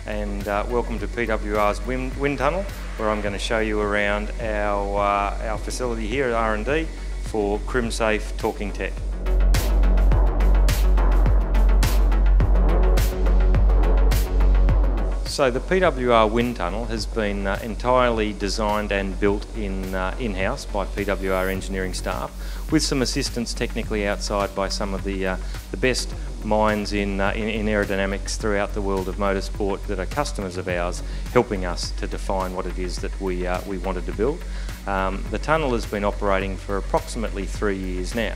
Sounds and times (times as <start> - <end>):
Music: 0.0 - 38.3
Speech: 0.1 - 9.0, 15.3 - 38.3.